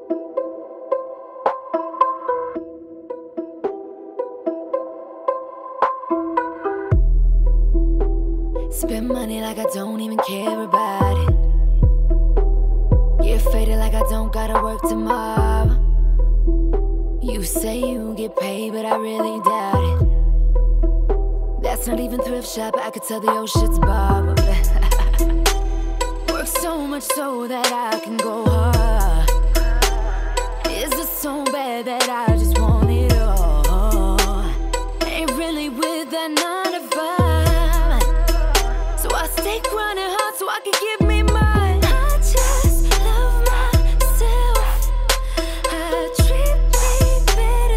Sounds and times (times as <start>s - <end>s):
Independent music: 0.0s - 47.7s.